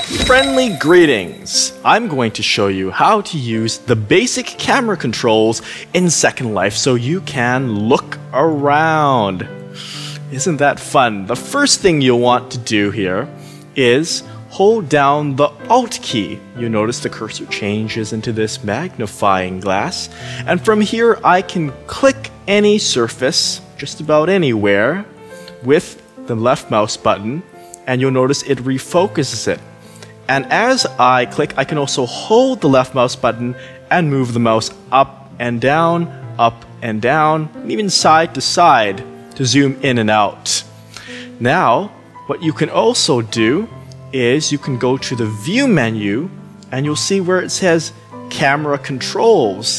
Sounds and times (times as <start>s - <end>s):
Speech: 0.0s - 9.5s, 10.3s - 29.6s, 30.3s - 40.7s, 41.4s - 49.7s
Music: 0.0s - 49.7s.